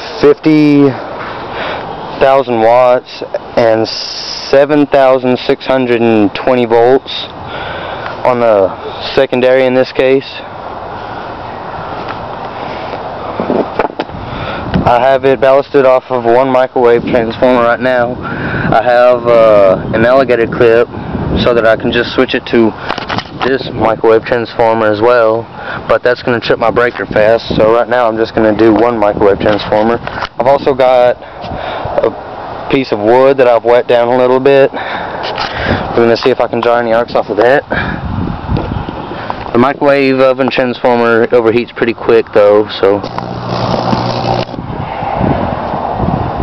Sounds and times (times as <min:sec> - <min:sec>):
Speech: 0:00.2 - 0:01.0, 0:02.2 - 0:07.3, 0:08.2 - 0:10.5, 0:14.9 - 0:22.8, 0:23.4 - 0:31.2, 0:32.0 - 0:34.8, 0:36.0 - 0:37.7, 0:39.5 - 0:43.1.